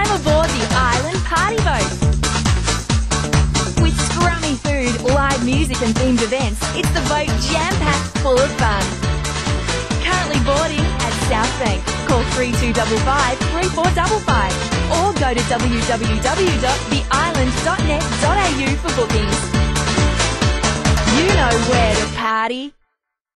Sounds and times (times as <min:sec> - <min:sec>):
Speech: 0:00.0 - 0:02.0, 0:03.8 - 0:09.0, 0:10.0 - 0:19.5, 0:21.1 - 0:22.8
Music: 0:00.0 - 0:23.1.